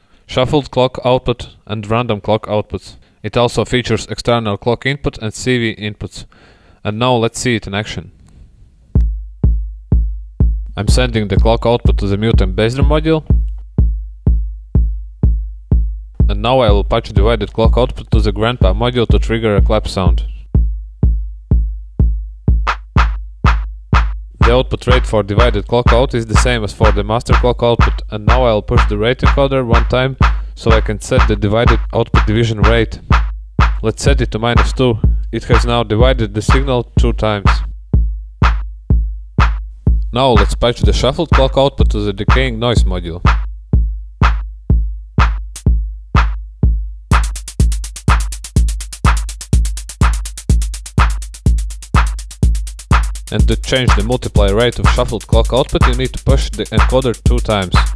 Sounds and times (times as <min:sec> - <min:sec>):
Speech: 0:00.3 - 0:08.2, 0:10.8 - 0:13.3, 0:16.3 - 0:20.4, 0:24.4 - 0:33.1, 0:33.8 - 0:37.7, 0:40.1 - 0:43.3, 0:53.3 - 0:57.9.